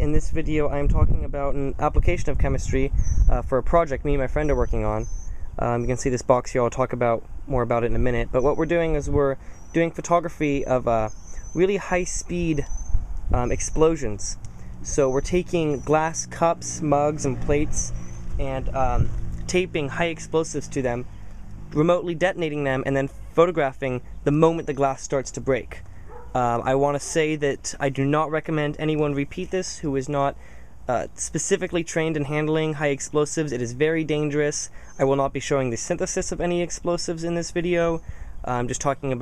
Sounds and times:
Speech: 0:00.0 - 0:12.7, 0:13.3 - 0:21.1, 0:21.8 - 0:25.8, 0:26.4 - 0:39.2.

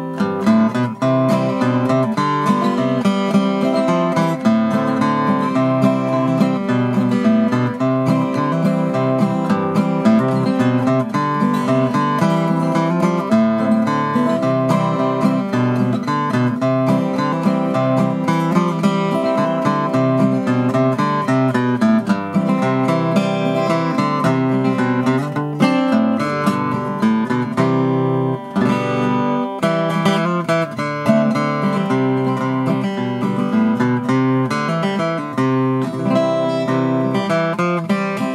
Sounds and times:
Strum: 0:00.0 - 0:38.3.

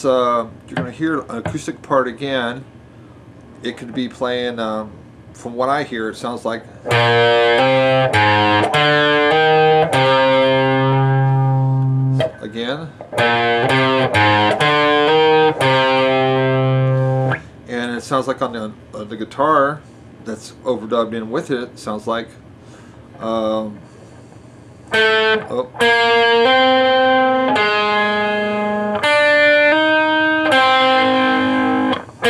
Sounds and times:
Speech: 0:00.0 - 0:02.7, 0:03.6 - 0:06.7, 0:12.4 - 0:13.0, 0:17.7 - 0:22.4, 0:23.2 - 0:23.8, 0:25.4 - 0:25.8
Bass guitar: 0:06.9 - 0:17.5, 0:25.0 - 0:32.2.

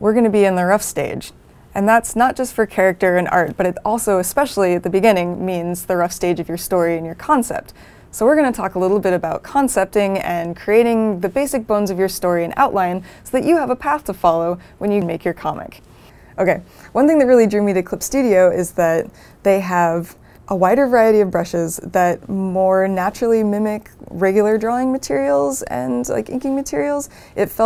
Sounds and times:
Speech: 0:00.0 - 0:15.8, 0:16.4 - 0:27.6.

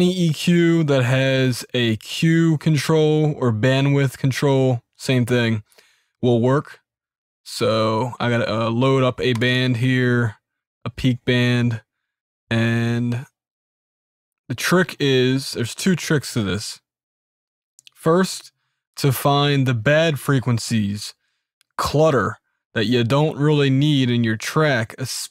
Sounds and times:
Speech: 0:00.0 - 0:06.8, 0:07.5 - 0:11.9, 0:12.5 - 0:13.4, 0:14.5 - 0:16.9, 0:17.8 - 0:21.2, 0:21.8 - 0:25.3.

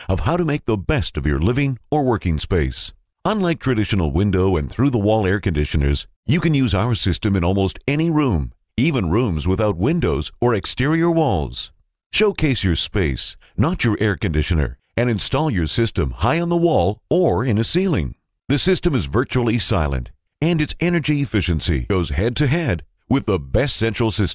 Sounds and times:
Speech: 0:00.0 - 0:24.3.

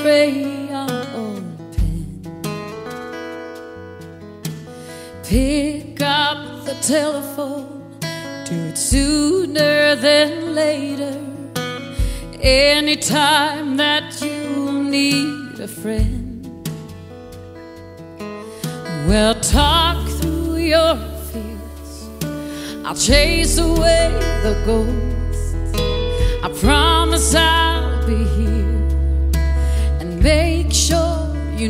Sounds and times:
Soul music: 0:00.0 - 0:31.6.

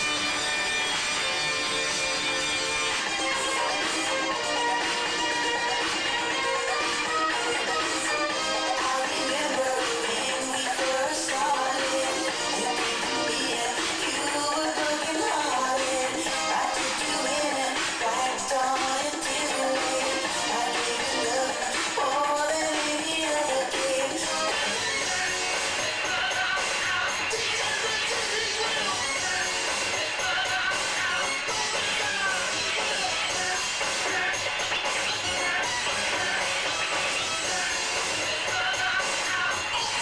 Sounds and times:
Music: 0:00.0 - 0:40.0.

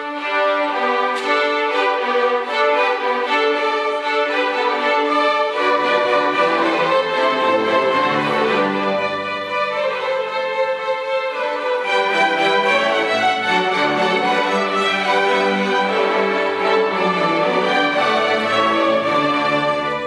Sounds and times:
Orchestra: 0:00.0 - 0:20.0.

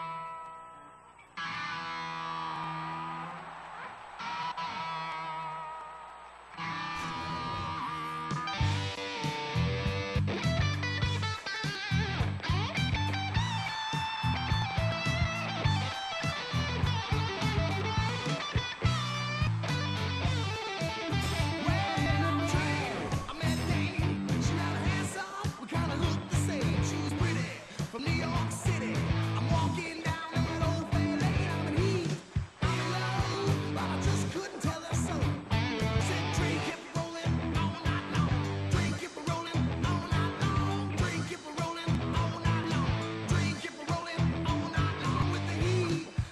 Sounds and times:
Music: 0:00.0 - 0:46.3.

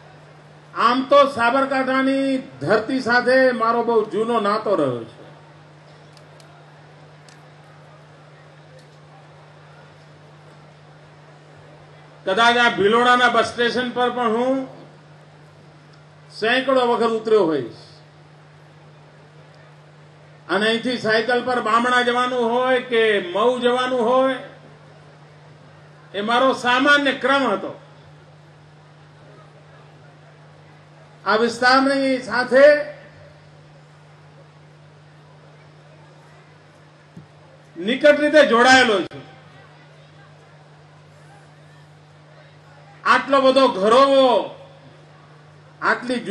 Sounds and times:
Narration, monologue: 0:00.4 - 0:06.2, 0:10.2 - 0:29.2, 0:30.4 - 0:33.7, 0:37.7 - 0:39.3, 0:43.0 - 0:46.3
Male speech, man speaking: 0:00.8 - 0:05.2, 0:12.3 - 0:14.8, 0:16.3 - 0:18.0, 0:20.5 - 0:24.6, 0:26.1 - 0:27.8, 0:31.2 - 0:33.0, 0:37.8 - 0:39.3, 0:43.0 - 0:44.7, 0:45.8 - 0:46.3.

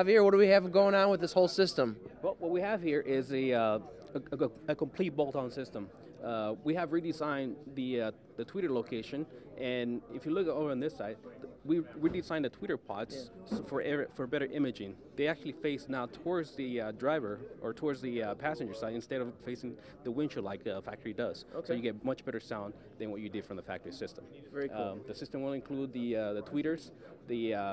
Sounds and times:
Speech: 0:00.0 - 0:27.7.

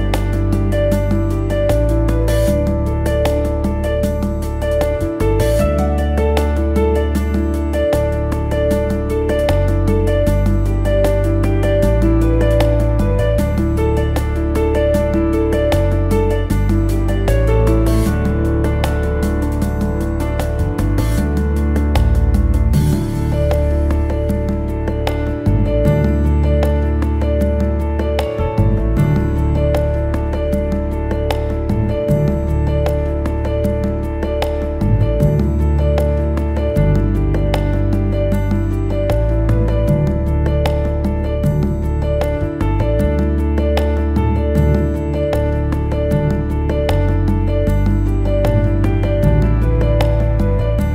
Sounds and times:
New-age music: 0:00.0 - 0:50.9.

